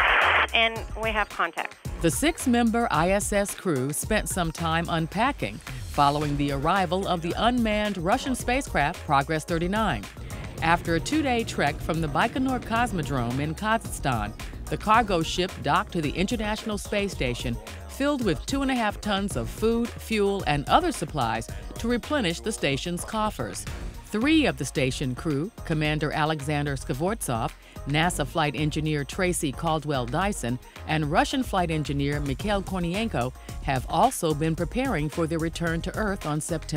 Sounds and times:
Music: 0:00.0 - 0:36.7
Speech: 0:00.6 - 0:10.0, 0:10.6 - 0:23.5, 0:24.2 - 0:36.7.

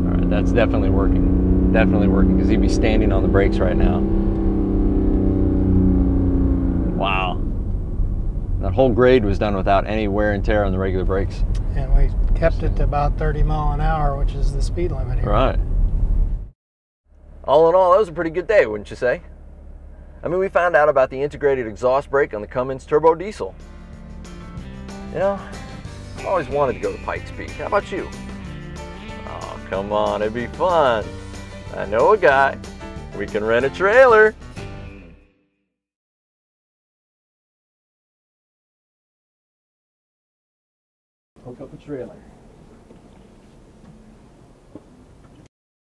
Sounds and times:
Speech: 0:00.0 - 0:01.2, 0:01.8 - 0:04.0, 0:07.0 - 0:07.4, 0:08.6 - 0:15.6, 0:17.5 - 0:19.3, 0:20.2 - 0:23.5, 0:25.2 - 0:25.5, 0:26.2 - 0:28.1, 0:29.3 - 0:31.1, 0:31.7 - 0:32.6, 0:33.2 - 0:34.3, 0:41.4 - 0:42.3
Music: 0:23.2 - 0:35.7.

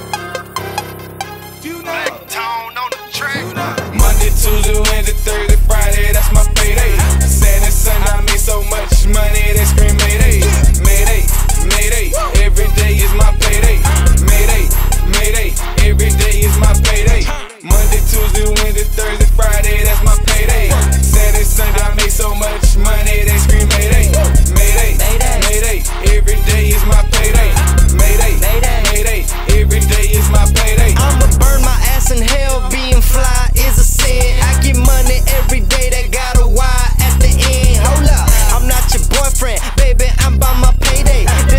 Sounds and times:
Music: 0:00.0 - 0:41.5.

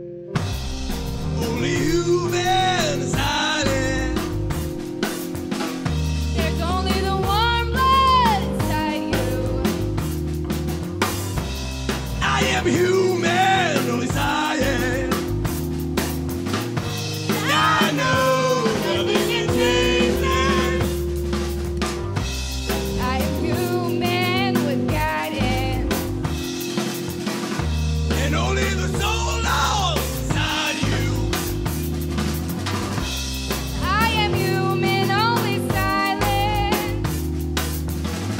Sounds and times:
Music: 0:00.0 - 0:38.3.

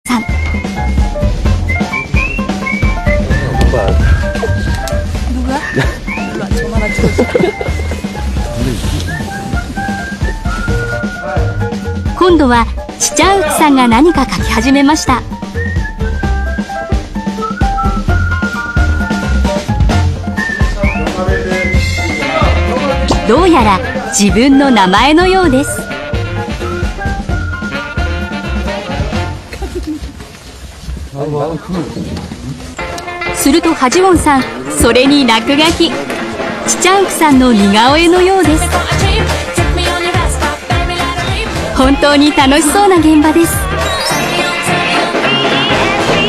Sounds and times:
Music: 0:00.0 - 0:31.0, 0:32.5 - 0:46.2.

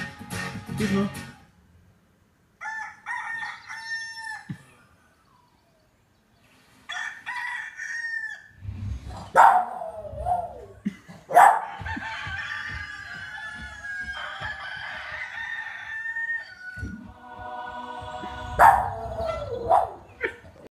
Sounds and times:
Music: 0:00.0 - 0:01.5, 0:17.1 - 0:19.6
Bow-wow: 0:09.3 - 0:10.6, 0:11.3 - 0:11.7, 0:18.6 - 0:20.4
Yip: 0:09.4 - 0:10.6, 0:11.3 - 0:11.7, 0:18.6 - 0:20.4.

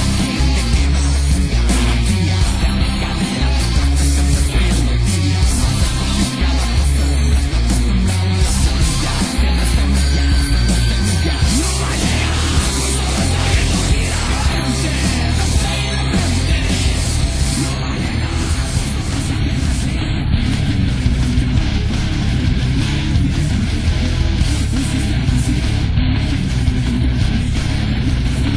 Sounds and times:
Music: 0:00.0 - 0:28.5.

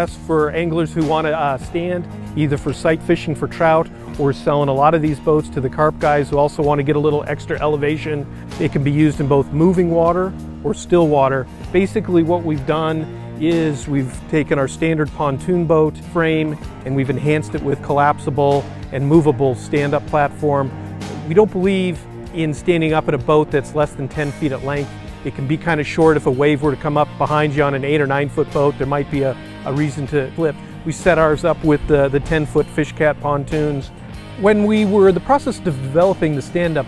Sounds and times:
Music: 0:00.0 - 0:36.8
Speech: 0:00.0 - 0:36.8.

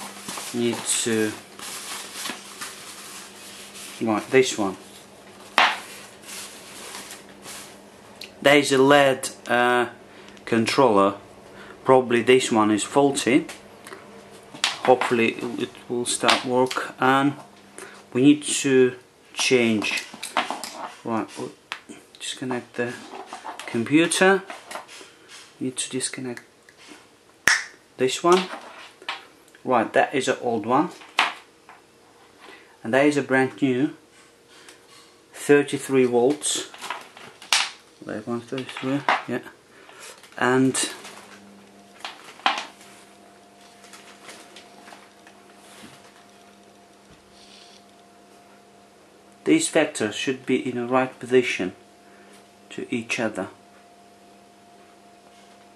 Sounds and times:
Speech: 0:00.5 - 0:01.4, 0:04.0 - 0:04.8, 0:08.4 - 0:11.2, 0:11.8 - 0:13.6, 0:14.8 - 0:17.5, 0:18.1 - 0:20.1, 0:21.0 - 0:21.6, 0:22.2 - 0:23.1, 0:23.7 - 0:24.5, 0:25.6 - 0:26.5, 0:28.0 - 0:28.6, 0:29.6 - 0:31.0, 0:32.8 - 0:34.0, 0:35.4 - 0:36.8, 0:38.0 - 0:39.6, 0:40.4 - 0:41.1, 0:49.4 - 0:51.8, 0:52.7 - 0:53.6.

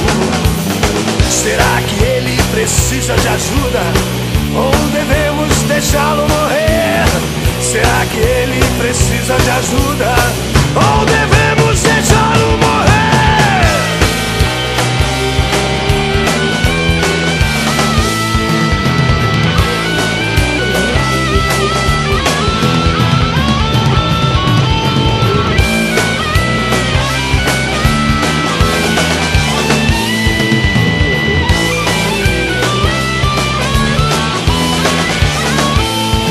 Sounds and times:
Punk rock: 0:00.0 - 0:36.3.

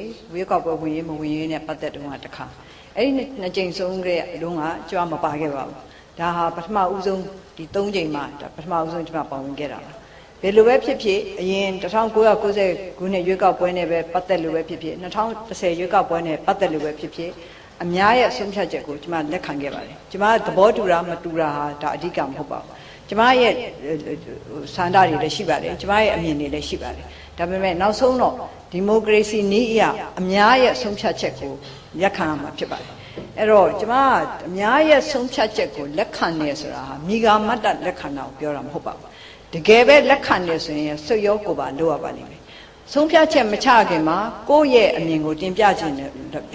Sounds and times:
Female speech, woman speaking: 0:00.0 - 0:46.5.

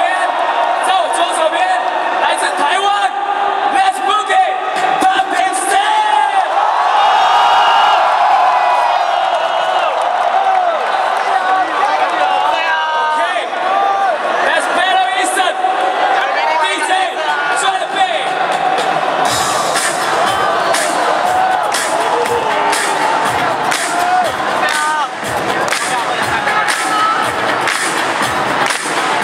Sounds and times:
Speech: 0:00.0 - 0:06.5, 0:14.5 - 0:15.6, 0:16.2 - 0:18.3
Music: 0:17.8 - 0:29.2.

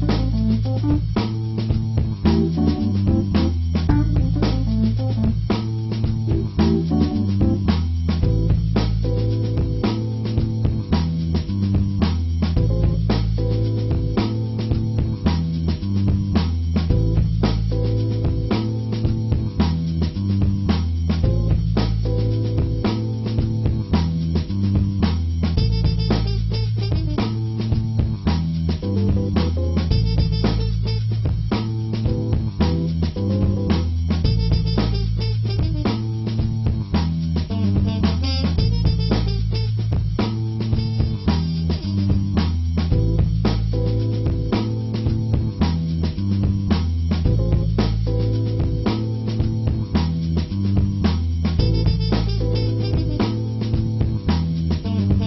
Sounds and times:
Music: 0:00.0 - 0:55.2.

